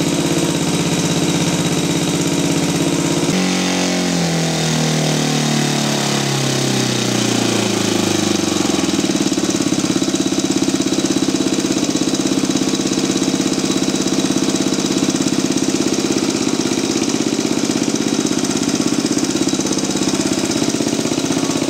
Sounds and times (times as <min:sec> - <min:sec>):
Heavy engine (low frequency): 0:00.0 - 0:21.6.